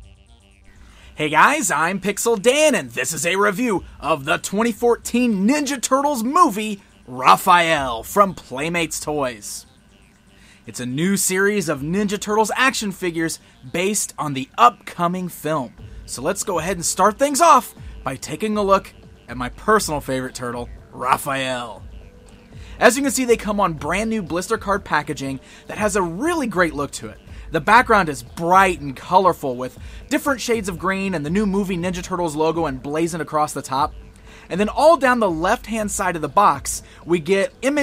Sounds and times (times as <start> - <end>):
Speech: 1.2 - 9.6, 10.7 - 21.8, 22.8 - 33.9, 34.5 - 37.8.